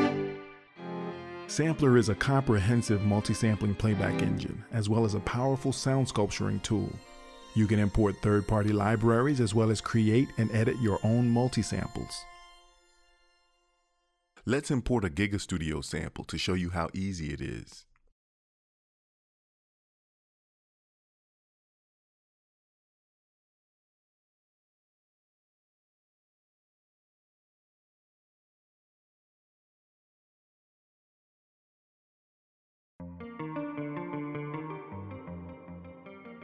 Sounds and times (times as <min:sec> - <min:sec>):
Music: 0:00.0 - 0:14.8, 0:33.0 - 0:36.4.